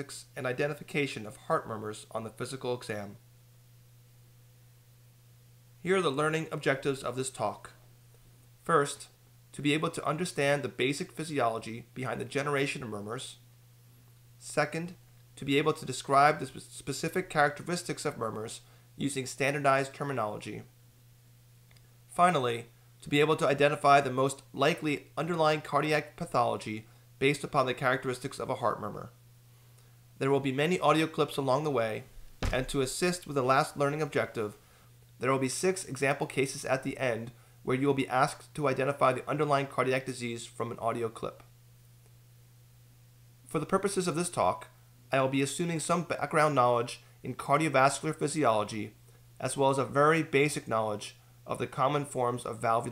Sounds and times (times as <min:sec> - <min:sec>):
Speech: 0:00.0 - 0:03.2, 0:05.8 - 0:07.8, 0:08.6 - 0:13.4, 0:14.4 - 0:20.7, 0:22.1 - 0:29.2, 0:30.2 - 0:34.6, 0:35.2 - 0:41.5, 0:43.5 - 0:52.9.